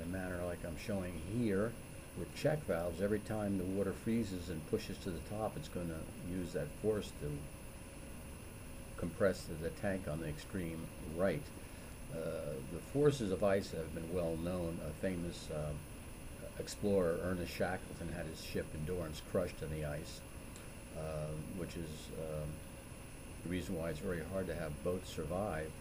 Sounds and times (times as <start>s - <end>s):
Speech: 0.0s - 7.5s, 9.0s - 20.2s, 21.0s - 22.6s, 23.4s - 25.8s.